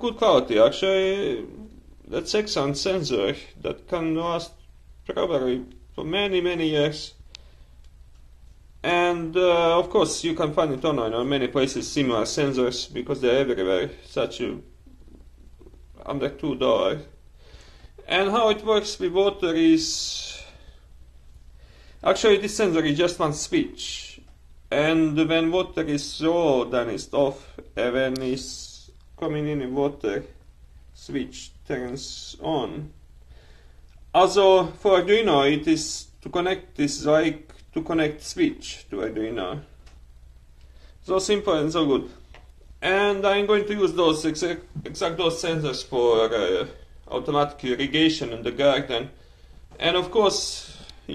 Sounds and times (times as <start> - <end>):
Speech: 0.0 - 7.2, 8.8 - 14.8, 16.0 - 17.2, 18.0 - 20.6, 22.0 - 30.4, 31.0 - 33.0, 34.1 - 39.8, 41.0 - 49.2, 49.8 - 51.1.